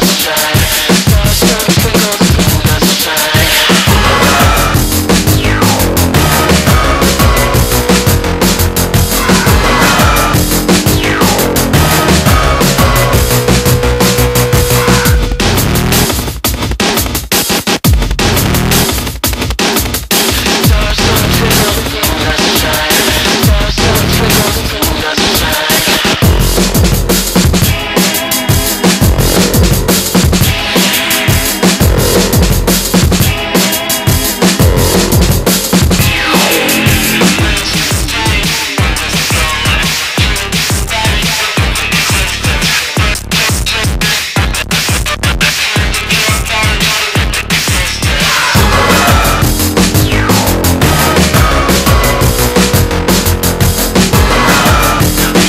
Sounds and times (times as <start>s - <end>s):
Music: 0.0s - 55.4s.